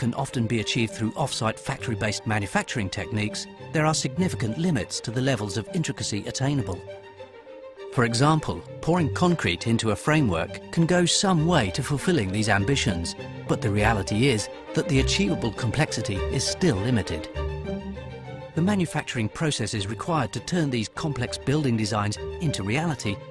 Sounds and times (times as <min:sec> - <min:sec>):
Speech: 0:00.0 - 0:06.8, 0:08.0 - 0:17.3, 0:18.6 - 0:23.2
Music: 0:00.0 - 0:23.3.